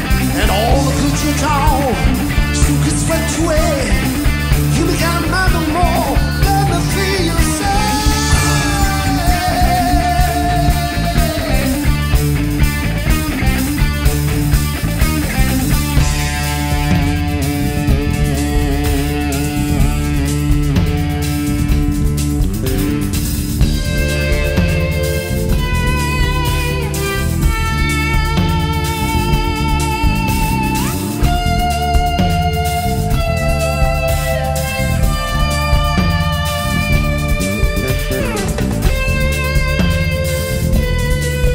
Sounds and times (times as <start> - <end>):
Drum: 0.0 - 41.5
Electric guitar: 0.0 - 41.5
Rock music: 0.0 - 41.5
Singing: 4.7 - 12.0.